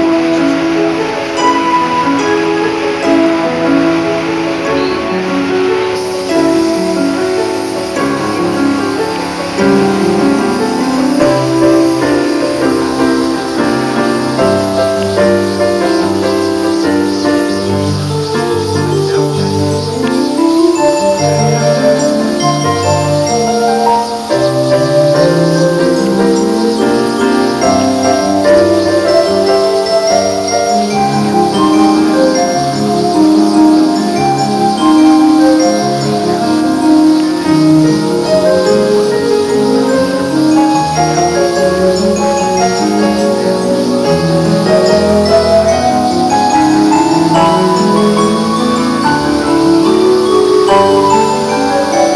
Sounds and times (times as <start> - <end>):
Music: 0.0 - 52.1.